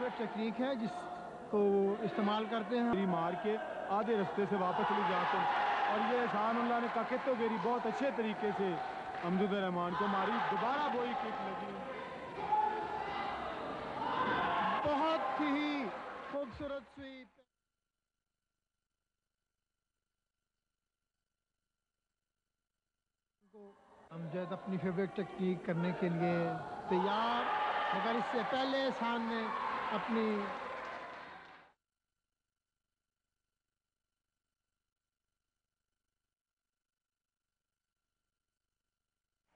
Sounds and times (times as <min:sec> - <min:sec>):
Speech: 0:00.0 - 0:12.2, 0:23.6 - 0:30.6.